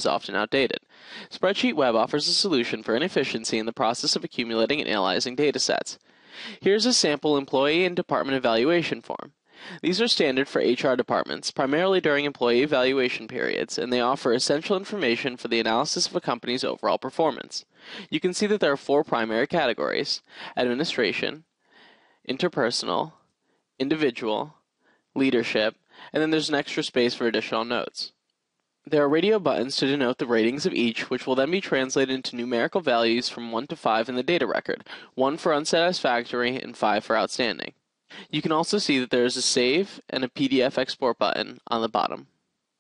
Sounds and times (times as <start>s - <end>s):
Speech: 0.0s - 21.5s, 22.3s - 23.2s, 23.8s - 24.6s, 25.2s - 28.2s, 28.9s - 42.3s.